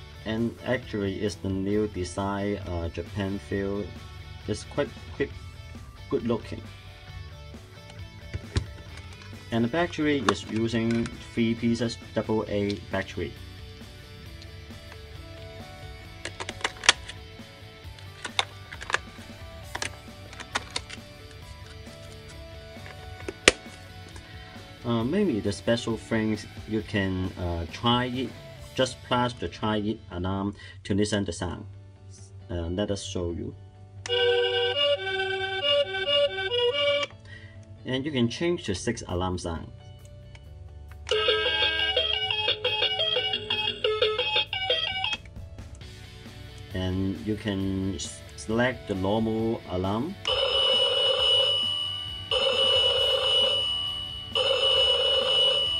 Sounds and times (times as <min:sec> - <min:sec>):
Music: 0:00.0 - 0:55.8
Speech: 0:00.2 - 0:05.4, 0:06.1 - 0:06.7, 0:09.5 - 0:13.4, 0:24.8 - 0:33.6, 0:37.8 - 0:39.7, 0:46.7 - 0:50.2.